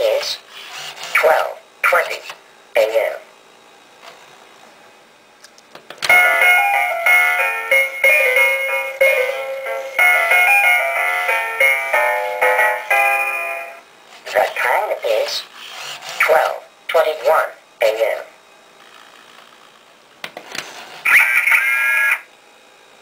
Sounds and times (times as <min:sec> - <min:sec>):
Speech: 0:00.0 - 0:00.4, 0:01.1 - 0:03.3, 0:14.2 - 0:15.5, 0:16.2 - 0:18.4, 0:21.1 - 0:22.3
Music: 0:06.1 - 0:13.8.